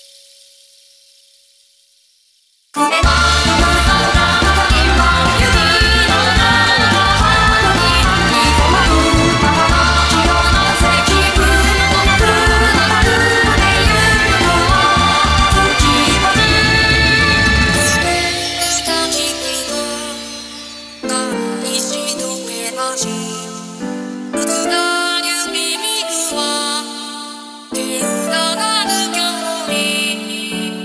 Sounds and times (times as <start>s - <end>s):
Music: 0.0s - 2.1s, 2.7s - 30.8s.